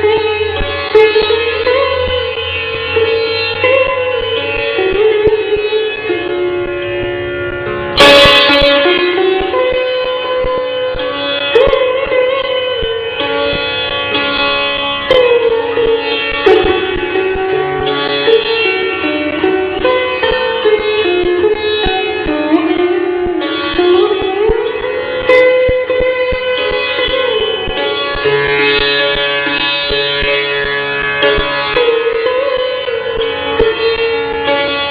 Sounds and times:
Carnatic music: 0.0 - 34.9
Sitar: 0.0 - 34.9.

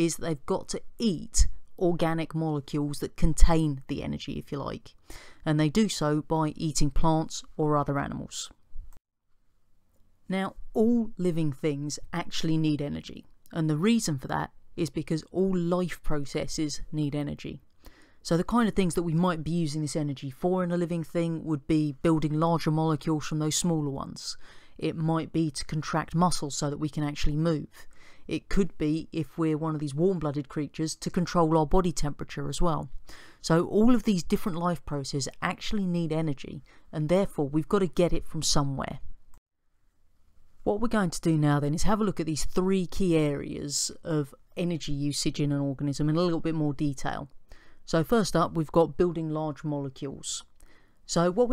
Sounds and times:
Speech: 0.0 - 8.6, 10.3 - 17.6, 18.2 - 39.1, 40.7 - 47.3, 47.9 - 50.5, 51.1 - 51.5.

